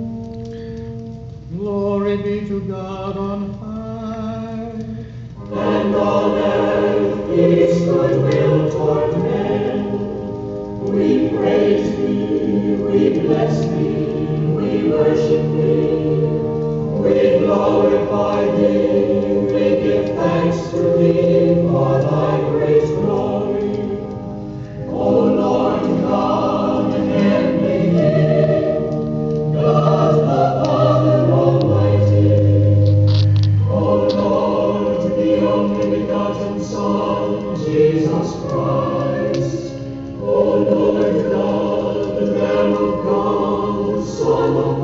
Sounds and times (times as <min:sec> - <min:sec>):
Mantra: 0:01.5 - 0:10.2, 0:10.9 - 0:28.9, 0:29.6 - 0:32.7, 0:33.6 - 0:44.8.